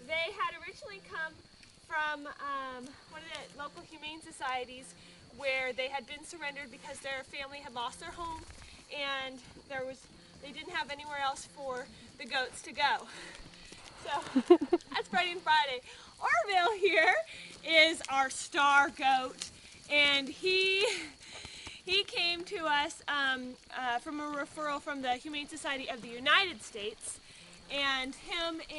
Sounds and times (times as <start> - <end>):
Speech: 0.0 - 13.1, 15.0 - 19.3, 19.9 - 21.1, 21.9 - 28.7.